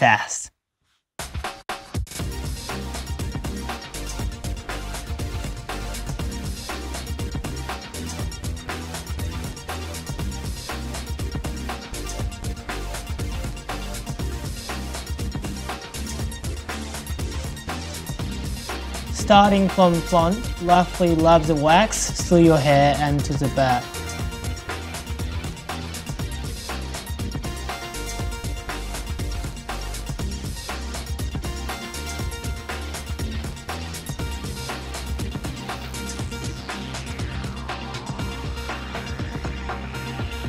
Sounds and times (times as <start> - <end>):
Music: 1.2 - 40.4.